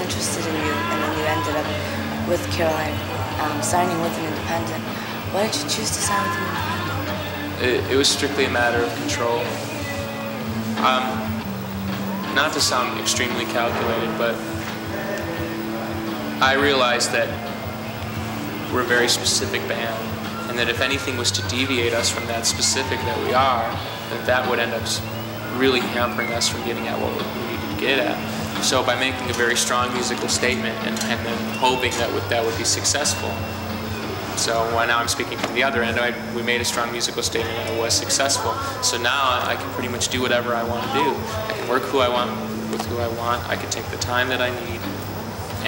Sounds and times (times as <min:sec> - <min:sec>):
Speech: 0:00.0 - 0:06.6, 0:07.6 - 0:09.6, 0:10.8 - 0:11.3, 0:12.3 - 0:14.4, 0:16.4 - 0:17.4, 0:18.7 - 0:33.4, 0:34.4 - 0:44.9.